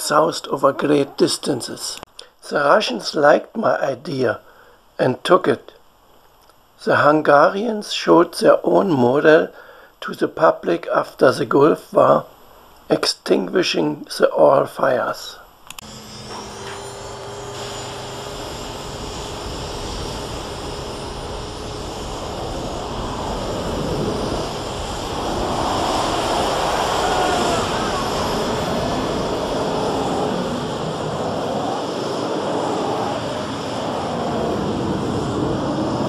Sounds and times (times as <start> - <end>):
Engine: 15.7 - 36.0.